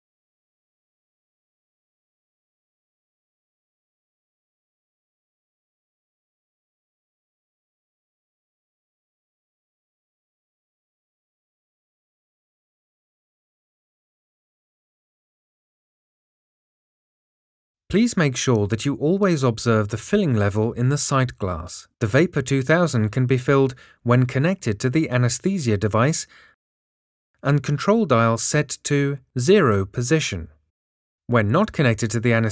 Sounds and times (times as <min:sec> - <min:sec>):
Speech: 0:17.9 - 0:26.4, 0:27.4 - 0:30.5, 0:31.3 - 0:32.5.